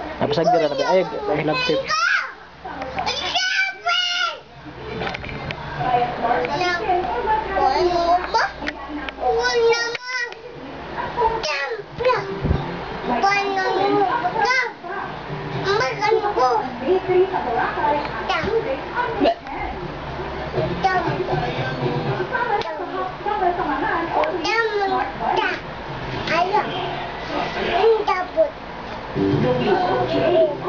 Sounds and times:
Child speech, kid speaking: 0.3s - 4.5s, 6.3s - 10.5s, 11.2s - 12.4s, 13.1s - 15.0s, 15.6s - 16.8s, 18.0s - 18.7s, 20.8s - 21.3s, 22.4s - 23.2s, 24.2s - 26.9s, 27.5s - 28.6s, 29.7s - 30.6s.

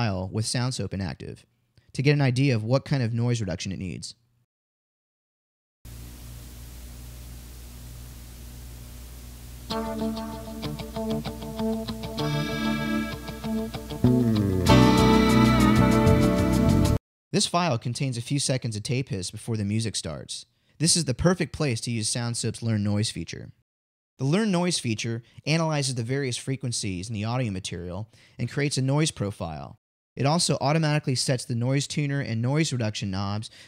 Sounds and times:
Speech: 0.0s - 4.2s, 17.3s - 23.6s, 24.2s - 33.5s
Music: 9.7s - 17.0s.

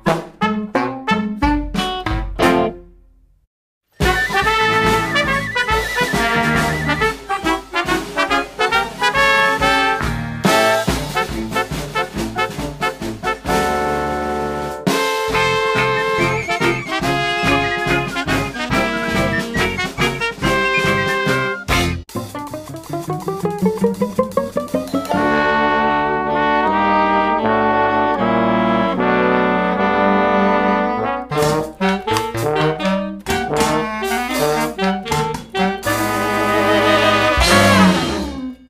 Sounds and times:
Orchestra: 4.0s - 38.6s.

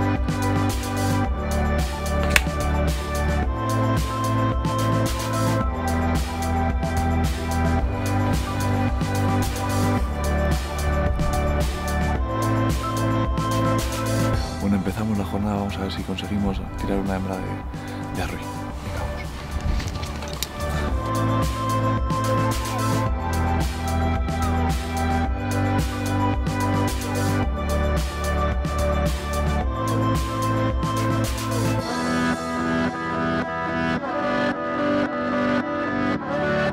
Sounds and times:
Music: 0.0s - 36.7s
Speech: 14.6s - 19.3s.

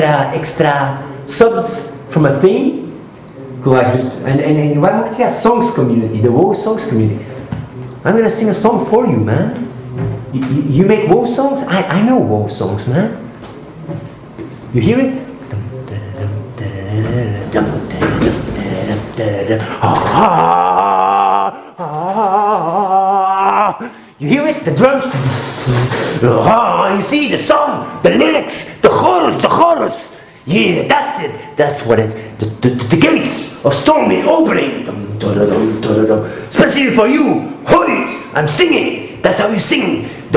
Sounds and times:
Speech: 0.0s - 13.3s, 14.7s - 21.6s, 23.0s - 40.3s.

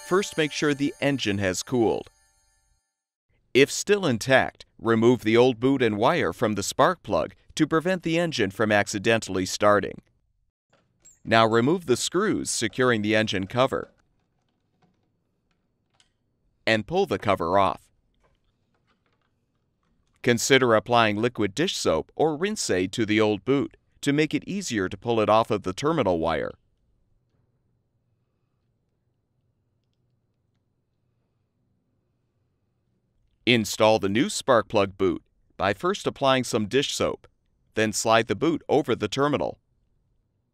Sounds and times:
Speech: 0.0s - 2.1s, 3.6s - 10.0s, 11.3s - 13.9s, 16.7s - 17.8s, 20.2s - 26.6s, 33.5s - 39.6s.

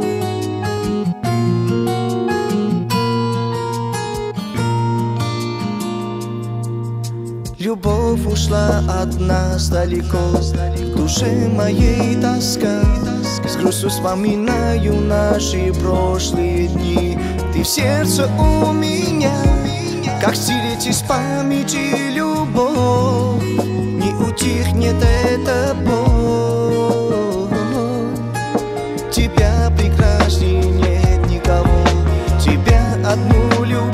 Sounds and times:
Music: 0.0s - 33.9s.

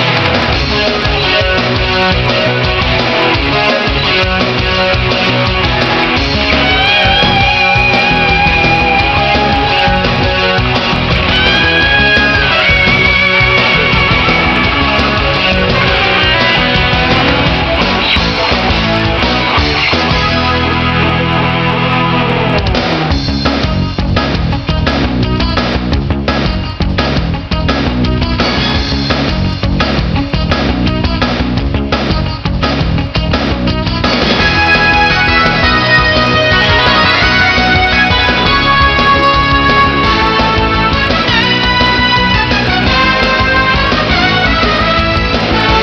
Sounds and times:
Video game music: 0.0s - 45.8s.

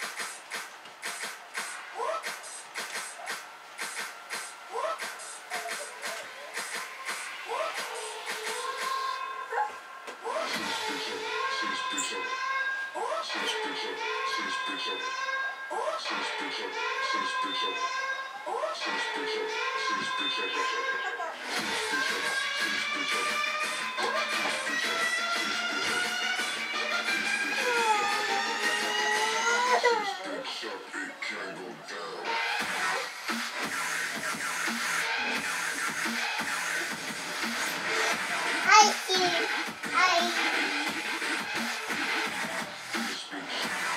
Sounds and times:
Dubstep: 0.0s - 9.2s, 10.2s - 12.3s, 18.5s - 31.1s, 32.2s - 43.9s.

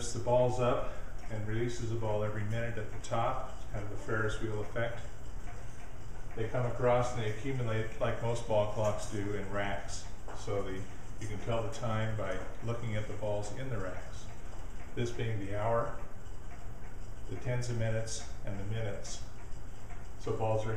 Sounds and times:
Speech: 0.0s - 5.1s, 6.4s - 14.3s, 15.0s - 16.1s, 17.3s - 19.3s, 20.2s - 20.7s.

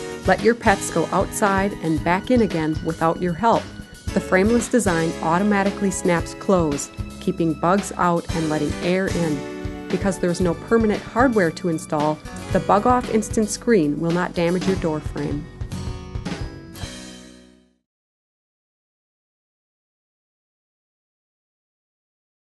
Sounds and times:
Music: 0.0s - 17.9s
Speech: 0.3s - 3.6s, 4.2s - 15.4s.

